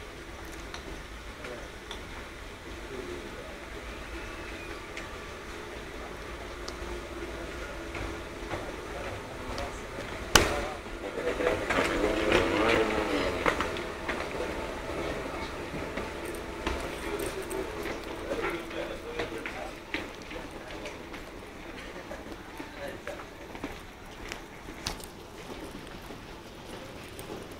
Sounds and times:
Speech: 1.3s - 1.9s, 2.7s - 23.8s.

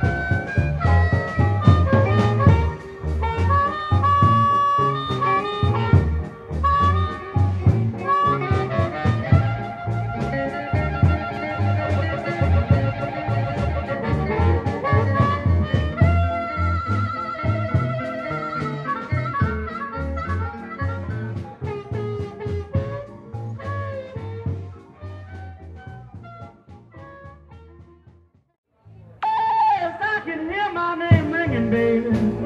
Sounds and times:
Music: 0.0s - 32.4s.

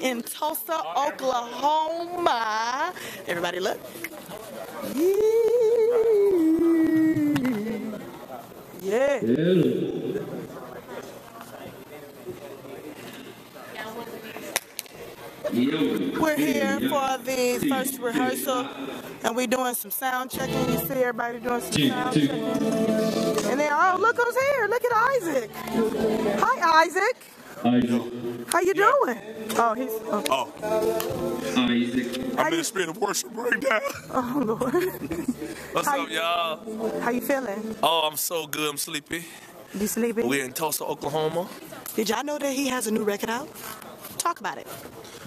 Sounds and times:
Gospel music: 14.8s - 40.8s.

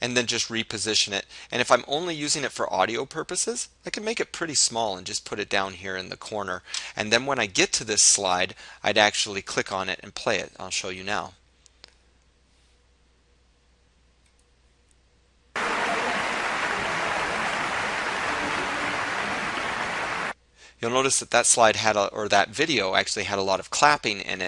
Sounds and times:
Speech: 0.0s - 11.4s, 15.6s - 19.8s, 20.7s - 24.4s.

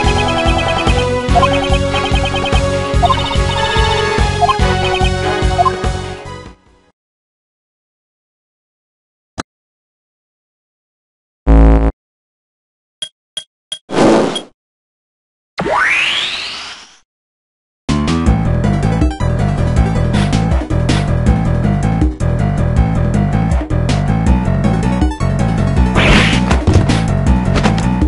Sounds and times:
Music: 0.0s - 7.0s, 17.9s - 28.0s.

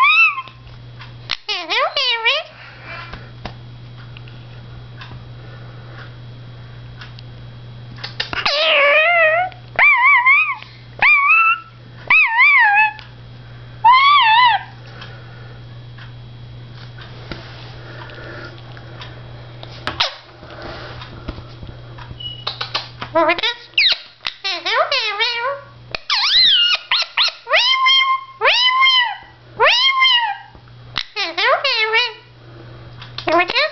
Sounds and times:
Domestic animals, pets: 0.0s - 0.6s, 8.4s - 13.0s, 13.8s - 14.8s, 22.2s - 32.2s.

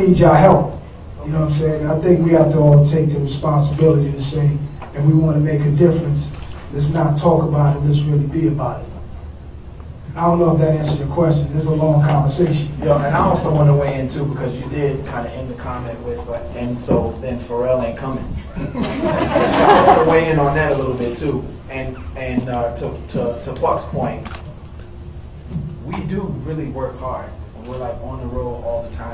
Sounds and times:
Male speech, man speaking: 0.0s - 8.9s, 10.2s - 18.4s, 19.8s - 24.3s, 25.9s - 29.1s.

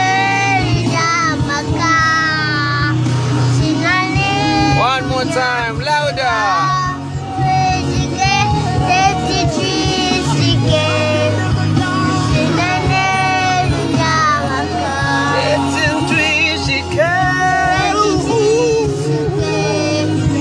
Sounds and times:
Child singing: 0.0s - 5.1s, 6.4s - 11.6s, 12.3s - 20.4s
Music: 0.0s - 20.4s
Male singing: 3.6s - 20.4s.

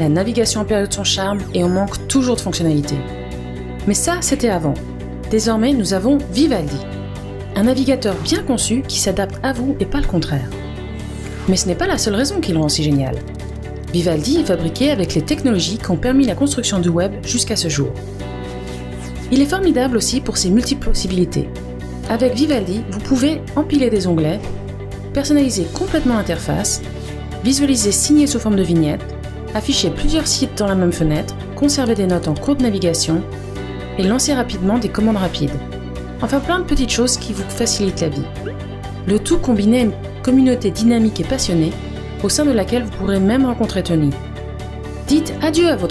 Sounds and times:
Speech: 0.0s - 3.0s, 3.8s - 6.8s, 7.6s - 10.5s, 11.5s - 13.2s, 13.9s - 18.0s, 19.3s - 21.5s, 22.1s - 24.4s, 25.1s - 26.8s, 27.4s - 29.0s, 29.6s - 33.2s, 34.0s - 35.6s, 36.2s - 38.3s, 39.1s - 44.2s, 45.1s - 45.9s
Music: 0.0s - 45.9s.

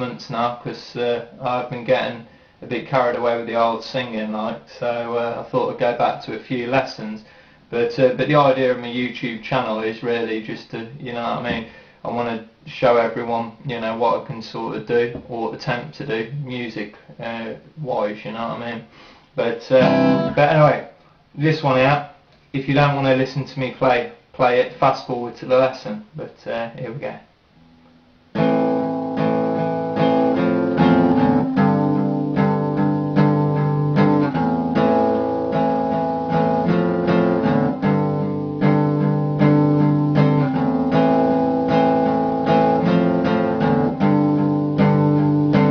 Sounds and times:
Speech: 0.0s - 27.3s
Strum: 19.8s - 20.7s, 27.6s - 45.7s
Acoustic guitar: 19.8s - 20.8s, 27.6s - 45.7s.

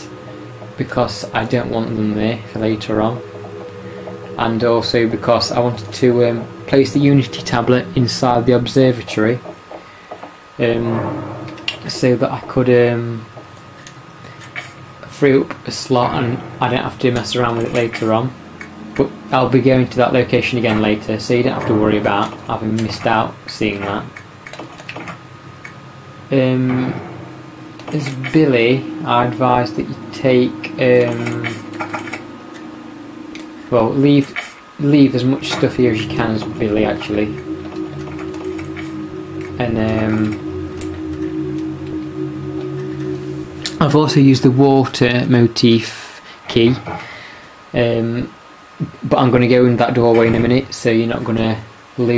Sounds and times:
Speech: 0.8s - 3.2s, 4.4s - 9.5s, 10.6s - 11.1s, 11.8s - 13.3s, 15.0s - 18.4s, 19.0s - 24.2s, 26.3s - 27.0s, 27.9s - 31.7s, 33.7s - 37.4s, 39.6s - 40.4s, 43.7s - 47.0s, 47.8s - 52.1s.

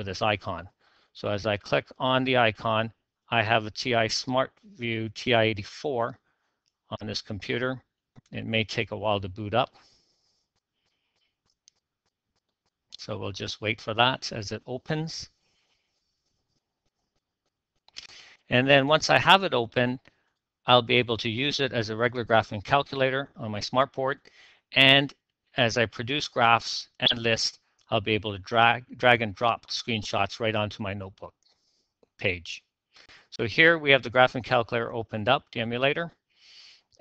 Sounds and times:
Speech: 0.0s - 6.2s, 6.9s - 9.8s, 13.0s - 15.3s, 18.0s - 20.0s, 20.7s - 24.2s, 24.8s - 31.3s, 32.2s - 32.6s, 33.2s - 36.1s.

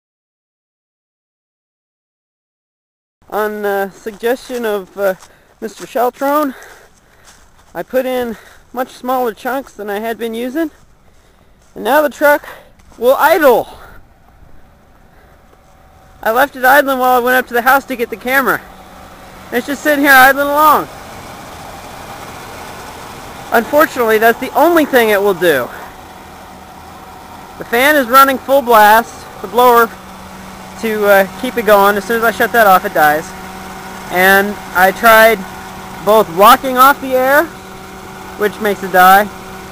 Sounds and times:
Car: 3.2s - 39.7s
Speech: 3.3s - 6.6s, 7.8s - 10.8s, 11.8s - 13.9s, 16.2s - 18.6s, 19.5s - 20.9s, 23.5s - 25.8s, 27.6s - 30.0s, 30.8s - 33.3s, 34.1s - 35.4s, 36.0s - 37.5s, 38.4s - 39.3s.

